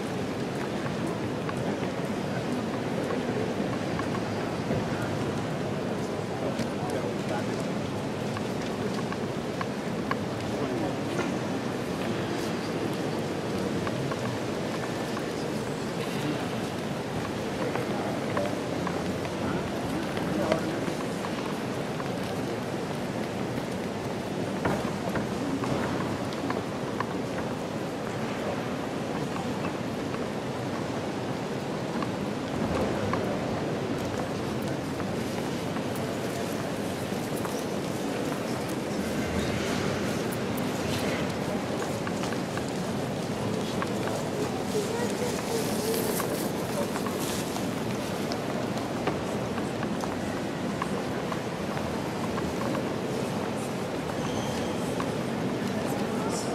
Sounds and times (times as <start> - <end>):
Inside, large room or hall: 0.0 - 56.5
Speech: 1.5 - 23.4, 38.4 - 47.6, 54.6 - 56.5.